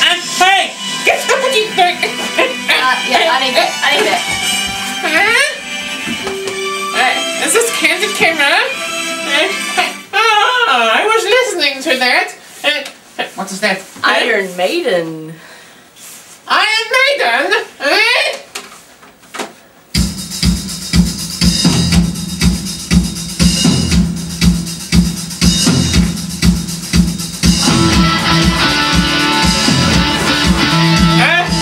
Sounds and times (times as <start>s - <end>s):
Speech: 10.2s - 15.4s.